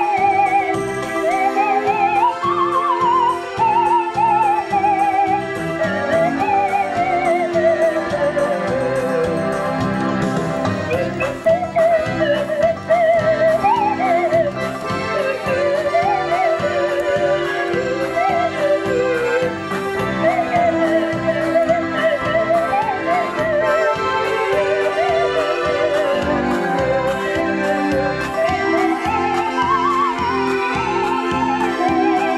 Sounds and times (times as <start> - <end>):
Musical instrument: 0.0 - 32.3.